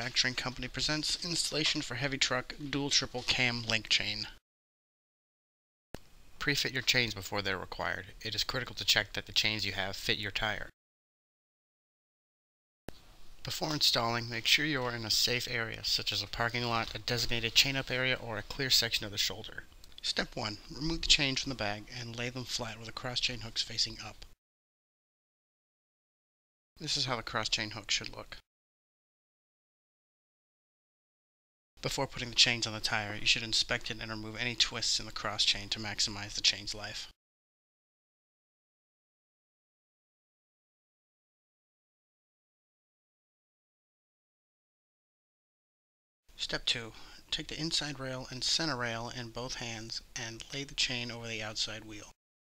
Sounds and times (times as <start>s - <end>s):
Speech: 0.0s - 4.4s, 6.4s - 10.8s, 13.4s - 24.4s, 26.8s - 28.4s, 31.8s - 37.2s, 46.4s - 52.2s.